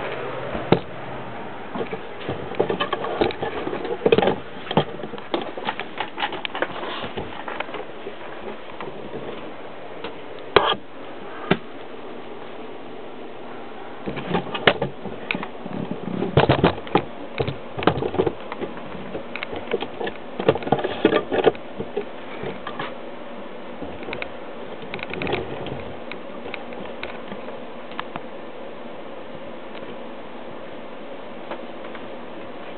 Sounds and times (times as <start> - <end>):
Vehicle: 0.0 - 32.7.